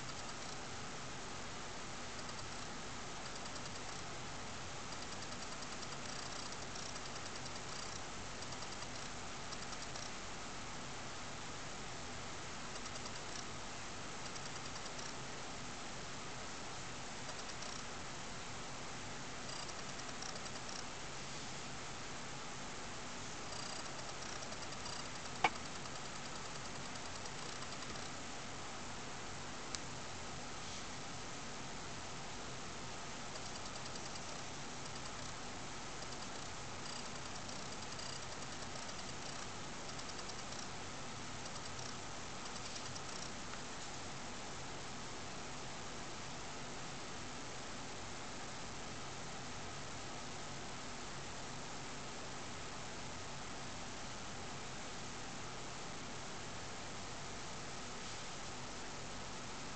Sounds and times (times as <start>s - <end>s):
Cricket: 0.0s - 0.9s, 1.7s - 11.0s, 12.6s - 15.8s, 16.7s - 21.0s, 23.4s - 28.3s, 32.3s - 59.7s.